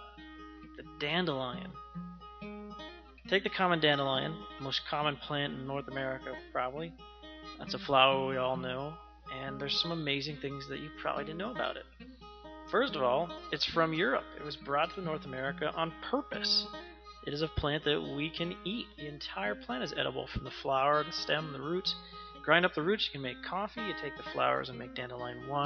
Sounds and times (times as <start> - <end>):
Music: 0.0 - 25.6
Speech: 0.8 - 1.8, 3.3 - 6.9, 7.6 - 11.9, 12.7 - 25.6.